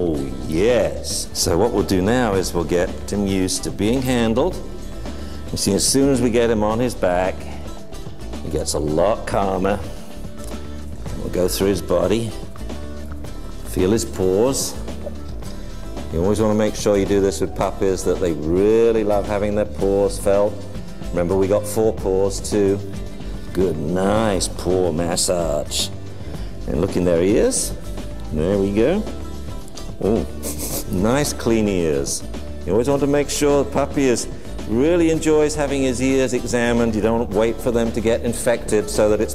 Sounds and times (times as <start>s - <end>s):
Speech: 0.0s - 4.6s, 5.5s - 7.6s, 8.4s - 9.9s, 11.1s - 12.5s, 13.7s - 14.8s, 16.1s - 22.9s, 23.6s - 25.9s, 26.7s - 29.2s, 30.0s - 30.3s, 30.9s - 39.3s
Music: 0.0s - 39.3s.